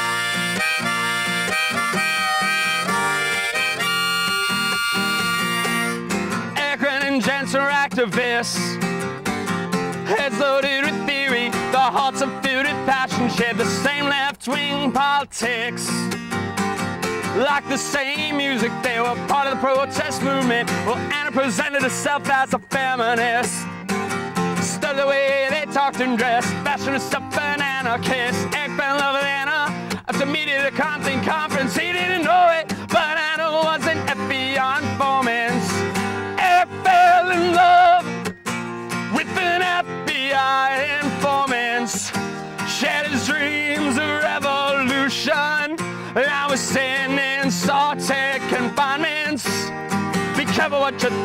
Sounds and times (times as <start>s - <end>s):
Music: 0.0s - 51.2s.